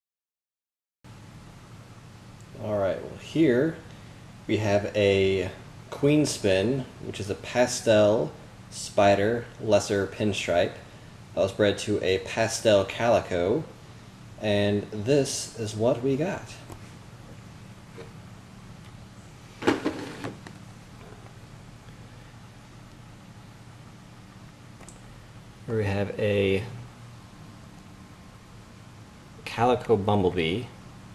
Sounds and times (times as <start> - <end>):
Speech: 2.5 - 3.9, 4.5 - 10.8, 11.4 - 13.8, 14.4 - 16.7, 25.7 - 26.9, 29.4 - 30.8.